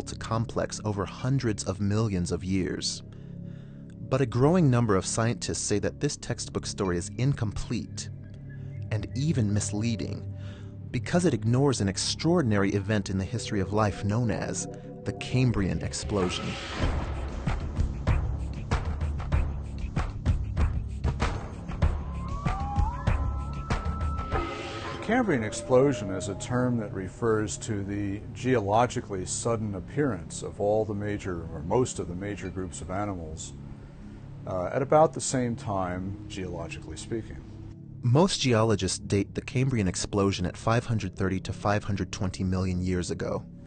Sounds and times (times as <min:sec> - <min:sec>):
Speech: 0:00.0 - 0:03.0, 0:04.0 - 0:08.1, 0:08.9 - 0:10.3, 0:11.0 - 0:16.6, 0:25.0 - 0:33.6, 0:34.5 - 0:37.4, 0:38.0 - 0:43.5
Music: 0:00.0 - 0:43.6.